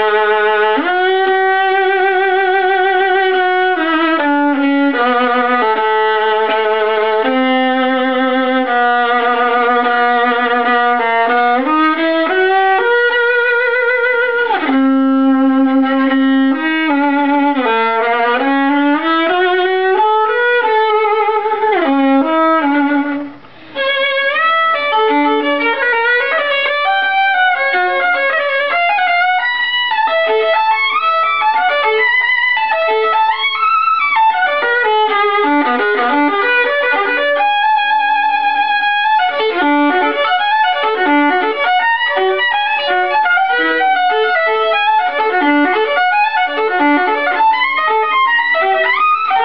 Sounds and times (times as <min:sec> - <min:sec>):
Violin, fiddle: 0:00.0 - 0:49.4.